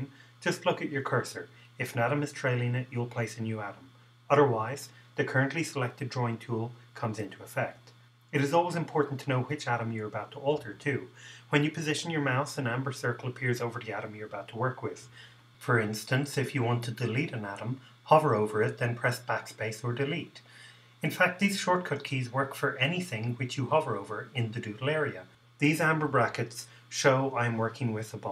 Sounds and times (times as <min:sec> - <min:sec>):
Speech: 0:00.0 - 0:28.3.